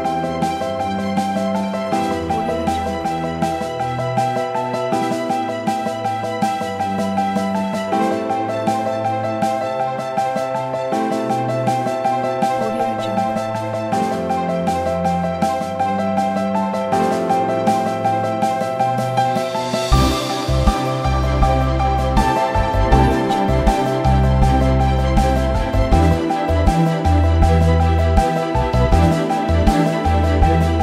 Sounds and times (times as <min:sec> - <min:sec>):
Rhythm and blues: 0:00.0 - 0:30.8.